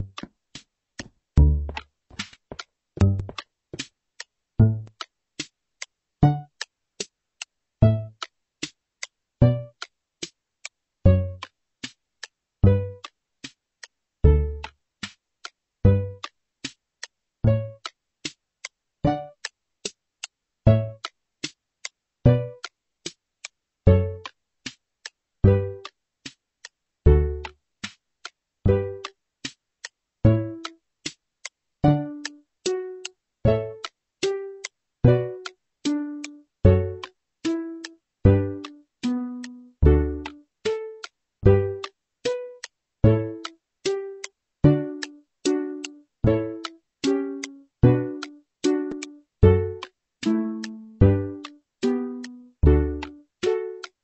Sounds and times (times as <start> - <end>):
Music: 0.0 - 54.0.